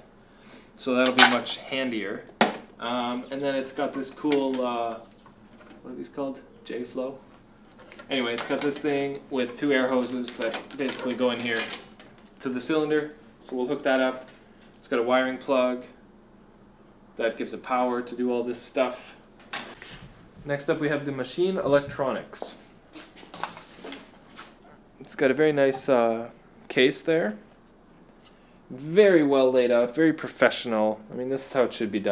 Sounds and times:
Inside, small room: 0.0s - 32.1s
Speech: 0.8s - 5.0s, 5.8s - 7.2s, 8.1s - 11.8s, 12.4s - 16.0s, 17.2s - 19.2s, 20.4s - 22.6s, 25.0s - 27.5s, 28.7s - 32.1s.

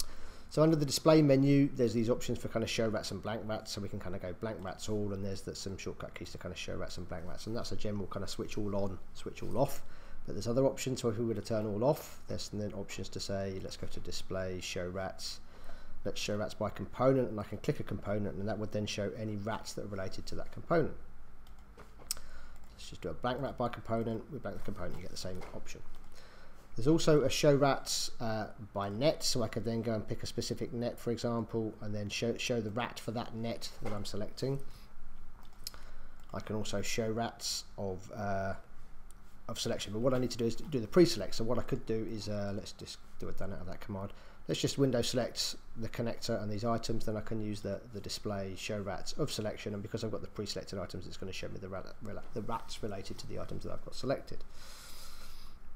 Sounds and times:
Speech: 0.5s - 15.4s, 16.0s - 21.0s, 22.8s - 25.9s, 26.8s - 34.7s, 36.3s - 38.7s, 39.5s - 54.4s.

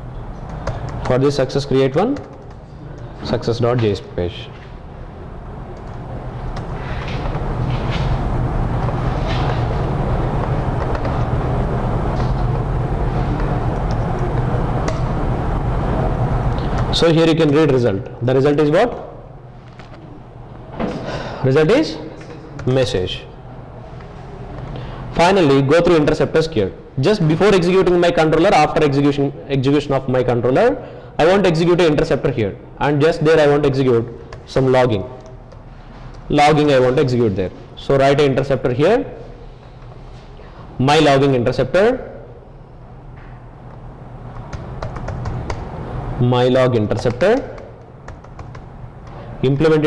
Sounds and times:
Speech: 1.1s - 2.2s, 3.2s - 4.6s, 16.9s - 19.2s, 21.4s - 23.3s, 25.2s - 35.2s, 36.3s - 39.2s, 40.8s - 42.2s, 46.2s - 47.6s, 49.4s - 49.8s.

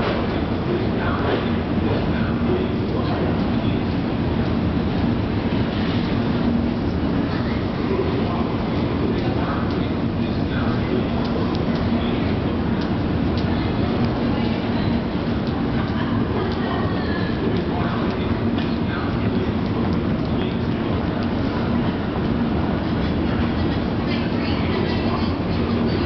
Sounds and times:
Subway, metro, underground: 0.0s - 26.0s.

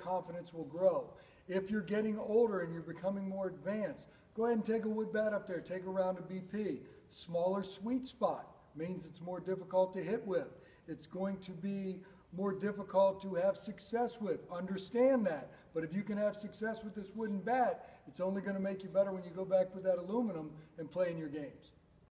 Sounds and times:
Speech: 0.0s - 21.8s.

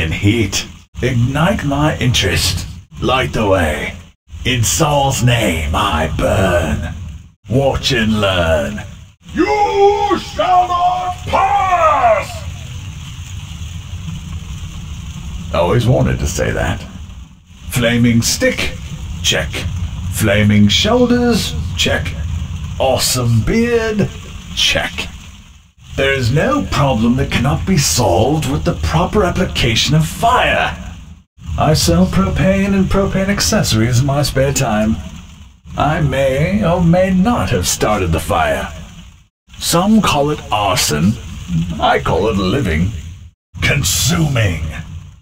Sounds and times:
Speech: 0.0s - 12.6s, 15.5s - 17.0s, 17.7s - 22.2s, 22.8s - 25.2s, 26.0s - 30.9s, 31.6s - 35.1s, 35.7s - 38.9s, 39.6s - 43.0s, 43.6s - 44.9s.

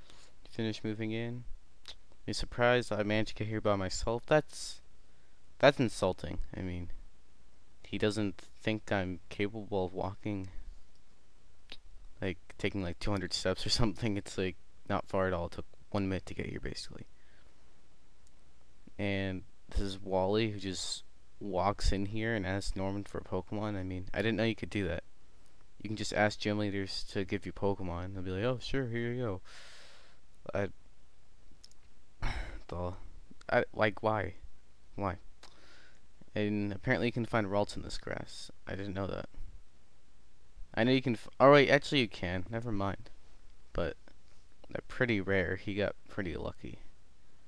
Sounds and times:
Speech: 0.5s - 4.8s, 5.6s - 7.0s, 7.8s - 10.6s, 12.2s - 17.1s, 18.9s - 25.1s, 25.8s - 29.5s, 30.4s - 30.8s, 32.3s - 34.4s, 35.0s - 35.2s, 36.3s - 39.4s, 40.7s - 43.1s, 43.7s - 44.0s, 44.7s - 46.9s.

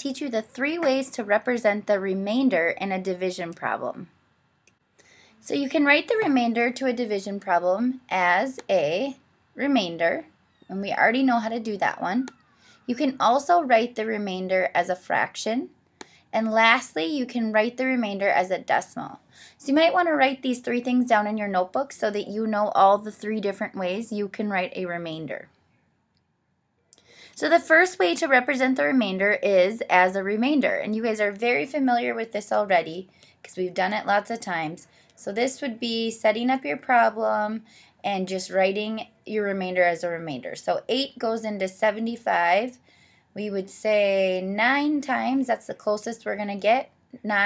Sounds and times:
Speech: 0.0s - 4.1s, 5.4s - 12.3s, 12.9s - 15.7s, 16.4s - 25.5s, 27.4s - 42.8s, 43.4s - 47.4s.

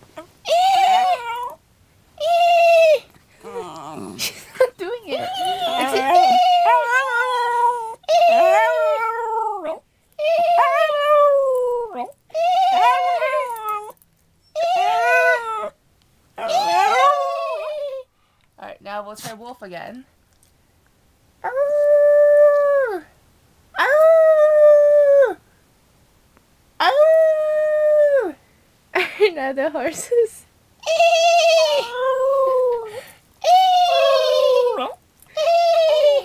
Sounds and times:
Speech: 18.6s - 20.1s, 29.2s - 30.5s.

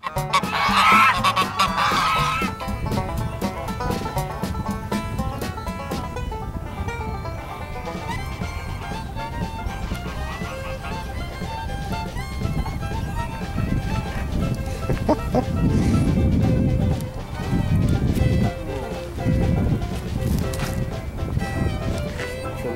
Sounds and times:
Goose: 0.0s - 4.7s, 6.7s - 22.7s.

